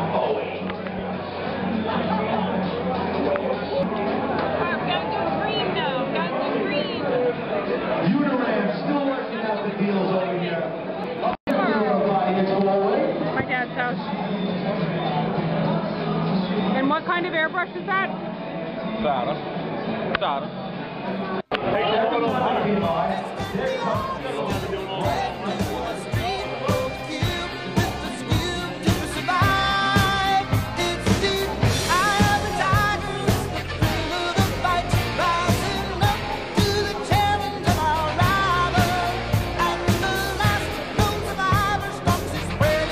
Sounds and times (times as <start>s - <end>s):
Music: 0.0s - 7.0s, 13.7s - 42.9s
Inside, public space: 0.0s - 42.9s.